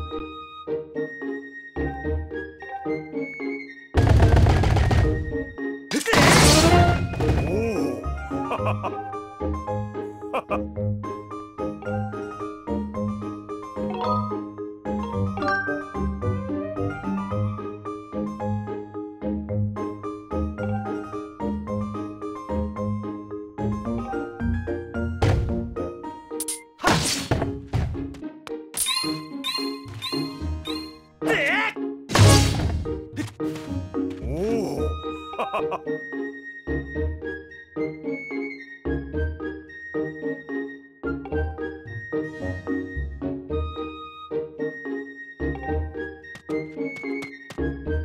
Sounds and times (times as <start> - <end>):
Music: 0.0 - 48.0.